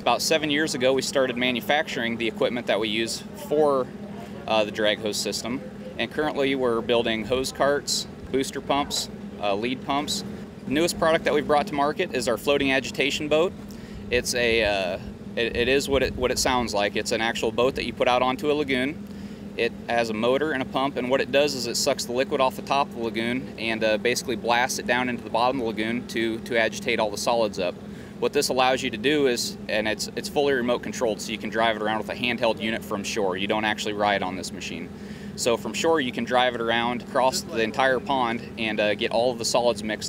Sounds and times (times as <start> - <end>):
Speech: 0.0 - 13.5, 14.1 - 19.0, 19.6 - 40.0.